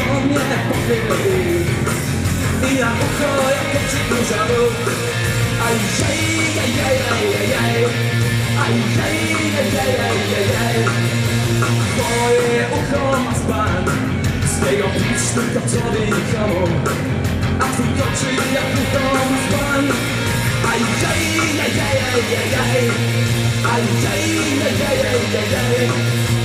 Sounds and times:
Music: 0:00.0 - 0:26.4.

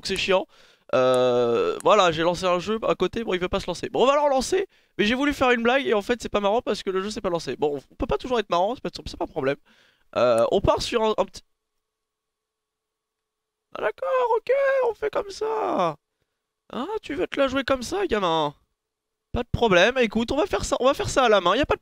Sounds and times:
Speech: 0:00.0 - 0:09.6, 0:10.2 - 0:11.5, 0:13.7 - 0:16.0, 0:16.7 - 0:18.6, 0:19.4 - 0:21.8.

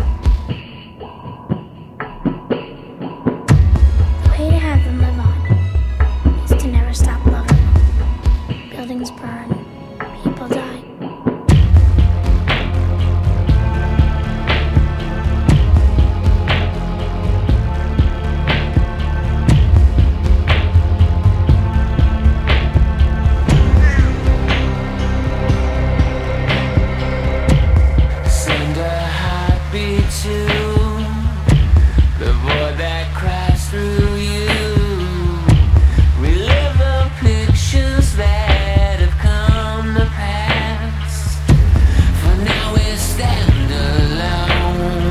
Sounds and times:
Music: 0:00.0 - 0:45.1.

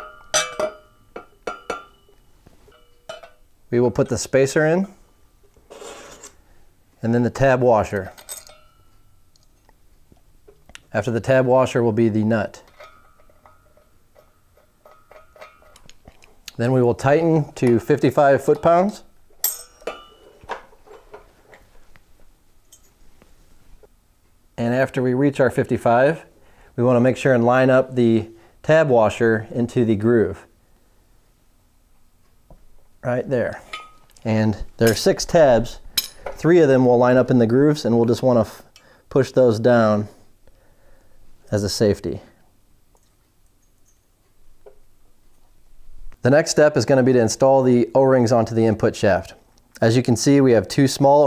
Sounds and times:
Speech: 0:03.7 - 0:05.0, 0:07.0 - 0:08.2, 0:10.9 - 0:12.7, 0:16.5 - 0:19.1, 0:24.6 - 0:30.5, 0:33.0 - 0:35.8, 0:36.4 - 0:40.2, 0:41.5 - 0:42.4, 0:46.2 - 0:51.2.

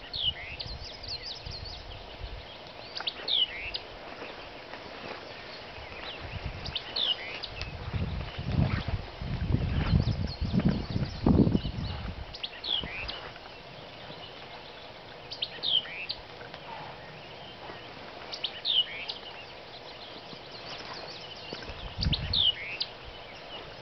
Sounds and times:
Bird vocalization, bird call, bird song: 0:00.0 - 0:23.8.

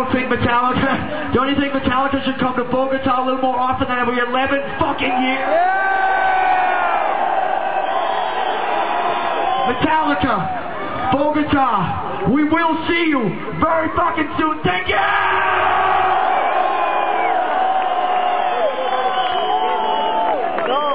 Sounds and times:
Speech: 0:00.0 - 0:05.6, 0:09.7 - 0:10.5, 0:11.1 - 0:15.1
Crowd: 0:00.0 - 0:20.9.

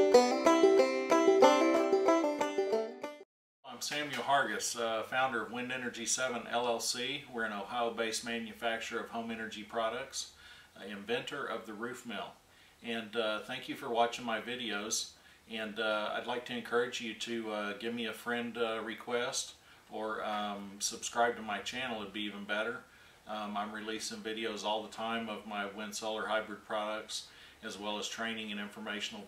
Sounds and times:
Speech: 0:03.7 - 0:29.2.

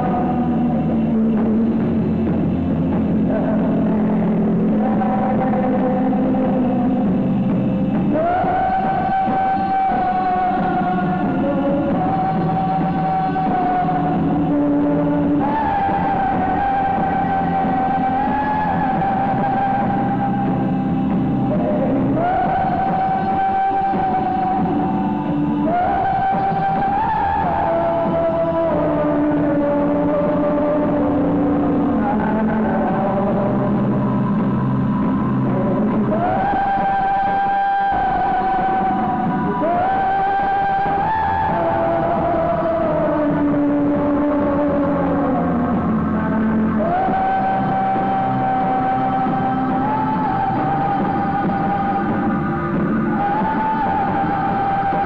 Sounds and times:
Music: 0:00.0 - 0:55.0.

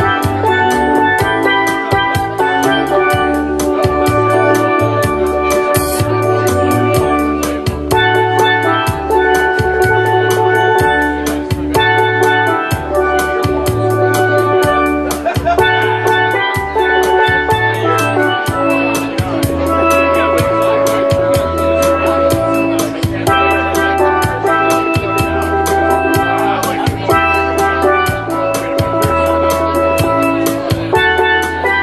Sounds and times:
Speech: 0:00.0 - 0:31.8
Steelpan: 0:00.0 - 0:31.8.

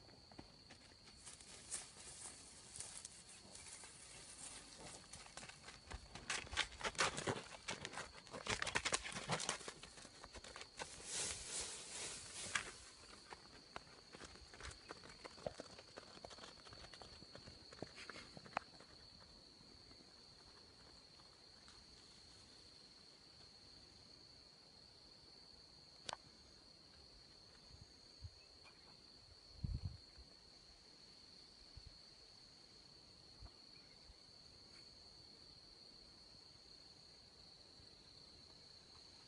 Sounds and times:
Walk, footsteps: 0:00.0 - 0:22.0.

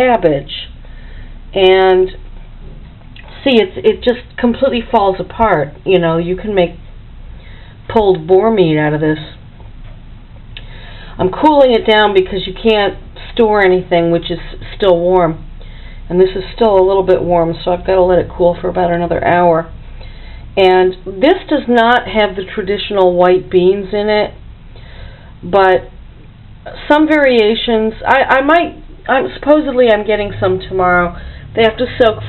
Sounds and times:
Speech: 0:00.0 - 0:00.8, 0:01.6 - 0:02.2, 0:03.2 - 0:06.8, 0:07.9 - 0:09.4, 0:11.2 - 0:15.5, 0:16.1 - 0:19.8, 0:20.6 - 0:24.4, 0:25.4 - 0:25.9, 0:26.7 - 0:32.2.

